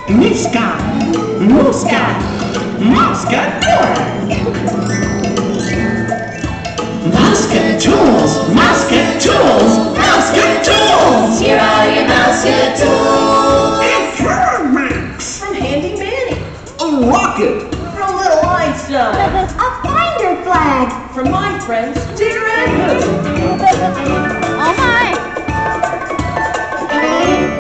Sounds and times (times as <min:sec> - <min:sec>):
Music: 0:00.0 - 0:27.6.